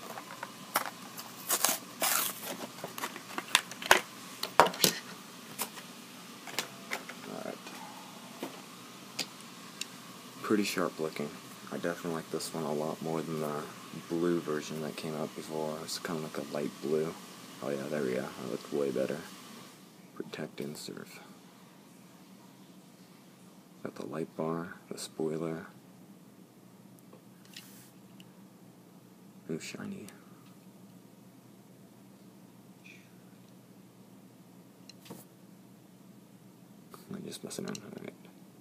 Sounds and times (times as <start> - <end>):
Inside, small room: 0.0 - 38.6
Speech: 7.3 - 7.7, 10.4 - 19.3, 20.2 - 21.4, 23.8 - 25.8, 29.4 - 30.2, 37.0 - 38.3.